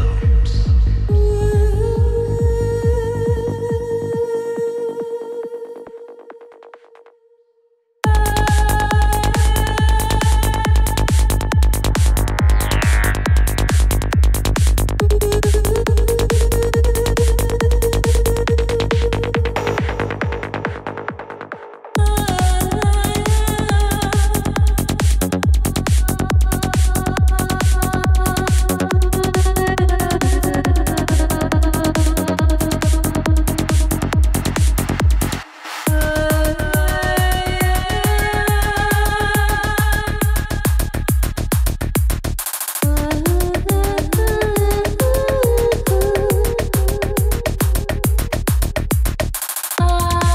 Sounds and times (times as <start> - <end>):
Techno: 0.0 - 7.2, 8.1 - 50.3.